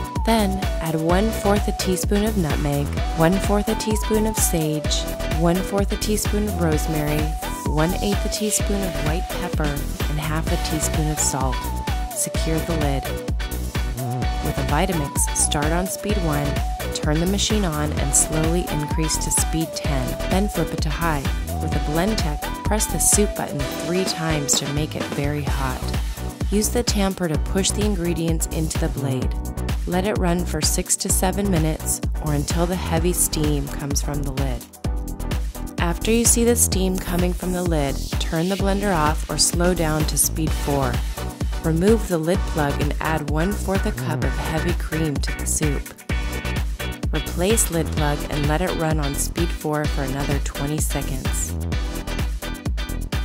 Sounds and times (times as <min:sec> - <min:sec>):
Music: 0:00.0 - 0:53.2
Speech: 0:00.3 - 0:11.6, 0:12.2 - 0:13.1, 0:14.0 - 0:25.9, 0:26.5 - 0:34.6, 0:35.8 - 0:41.0, 0:41.6 - 0:46.0, 0:47.1 - 0:51.5.